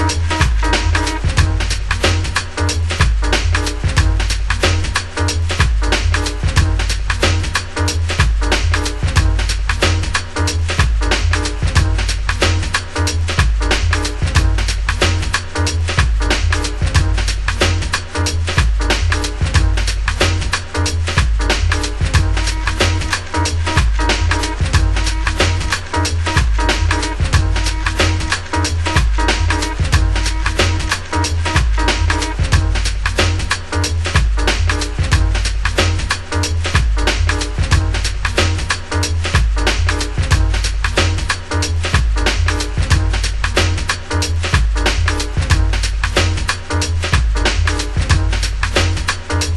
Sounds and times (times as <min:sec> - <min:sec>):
Music: 0:00.0 - 0:49.5.